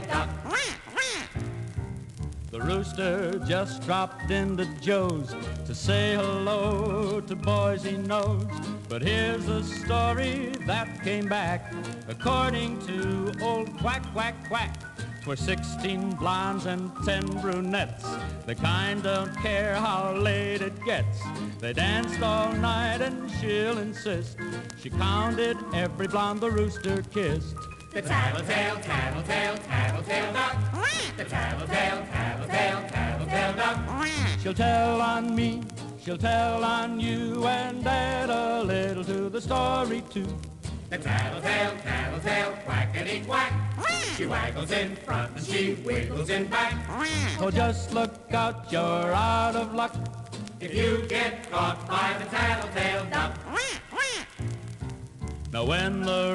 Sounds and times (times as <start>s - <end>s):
Music: 0.0s - 56.3s
Quack: 0.5s - 1.4s, 33.9s - 34.5s, 46.9s - 47.5s, 53.5s - 54.4s.